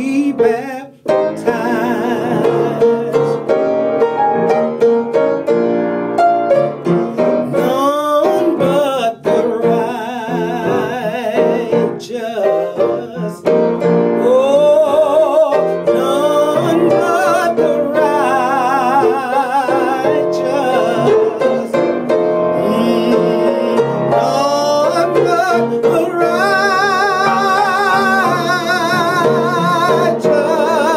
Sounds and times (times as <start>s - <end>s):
Music: 0.0s - 30.9s.